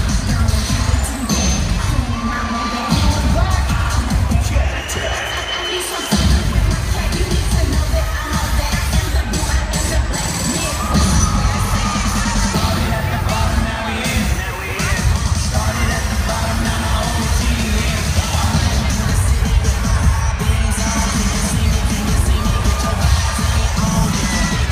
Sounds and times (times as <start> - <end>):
Crowd: 0.0 - 24.7
Music: 0.0 - 24.7.